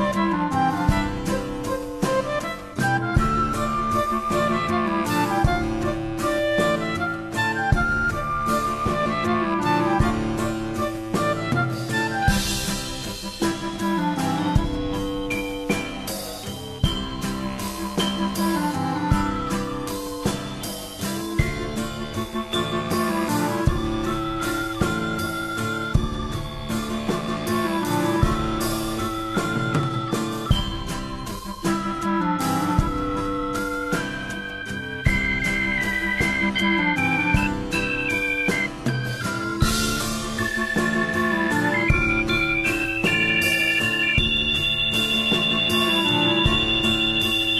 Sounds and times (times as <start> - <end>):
Music: 0.0 - 47.5.